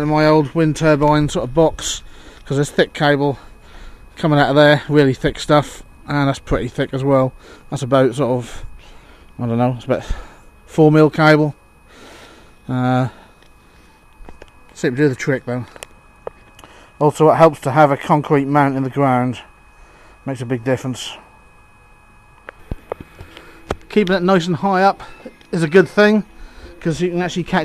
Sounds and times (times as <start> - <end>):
Speech: 0.0 - 3.4, 4.2 - 8.6, 9.4 - 10.1, 10.8 - 11.6, 14.8 - 15.7, 17.0 - 19.5, 20.3 - 21.2, 23.9 - 26.2, 26.8 - 27.6.